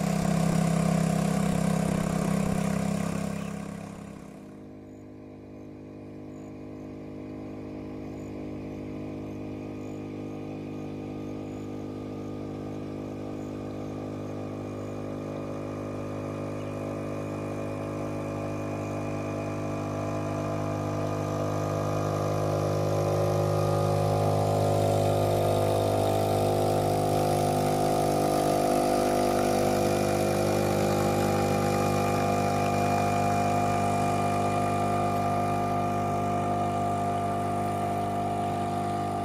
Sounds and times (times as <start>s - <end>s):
Boat, Water vehicle: 0.0s - 39.2s.